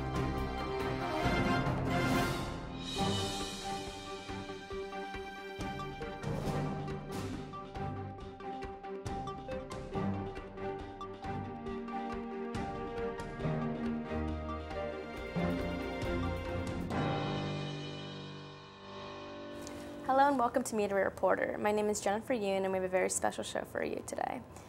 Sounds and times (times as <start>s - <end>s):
Music: 0.0s - 23.5s
Speech: 20.1s - 24.5s.